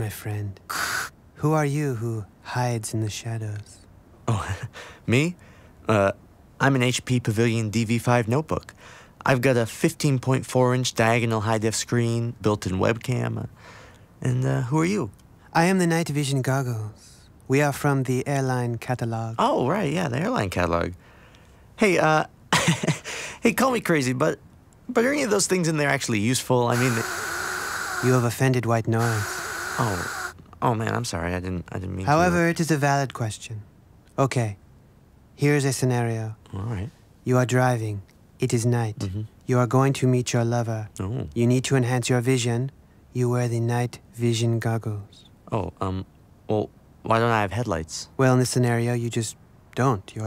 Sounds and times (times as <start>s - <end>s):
Speech: 0.0s - 0.6s, 1.4s - 13.5s, 14.2s - 21.0s, 21.8s - 22.3s, 23.4s - 27.0s, 28.1s - 29.2s, 30.6s - 33.6s, 34.2s - 34.6s, 35.4s - 50.2s
White noise: 0.0s - 50.2s.